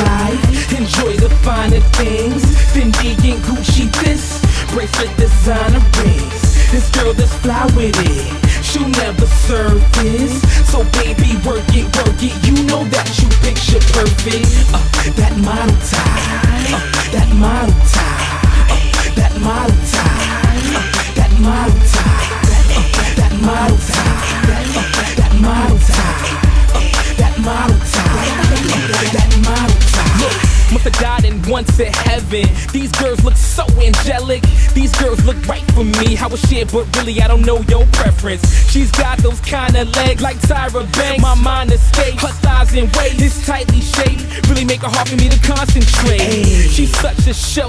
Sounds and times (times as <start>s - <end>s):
Music: 0.0s - 47.6s.